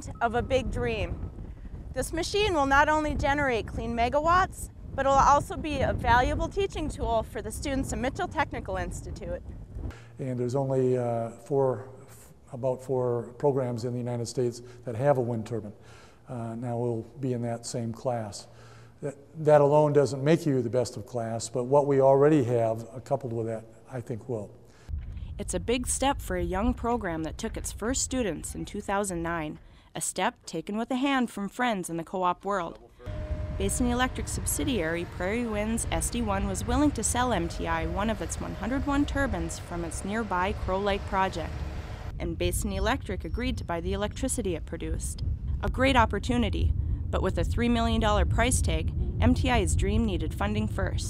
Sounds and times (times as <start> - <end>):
Speech: 0.0 - 1.1, 2.0 - 9.4, 10.2 - 11.9, 12.5 - 24.5, 25.4 - 32.9, 33.6 - 41.5, 42.2 - 51.0.